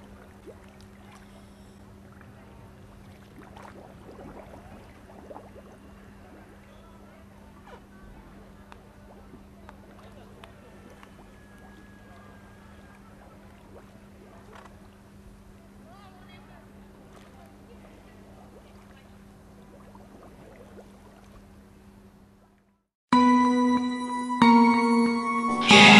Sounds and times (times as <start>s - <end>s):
Speech: 6.0s - 13.5s, 15.5s - 19.6s.